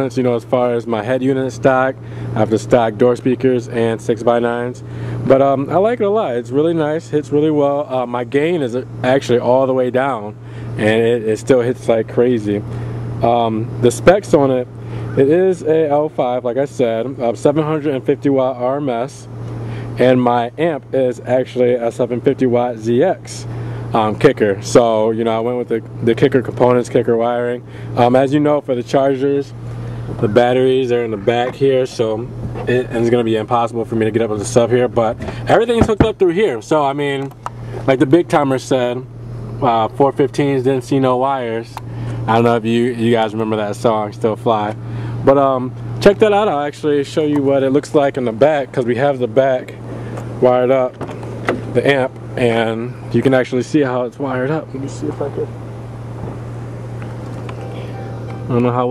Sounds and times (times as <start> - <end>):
Vehicle: 0.0 - 58.9.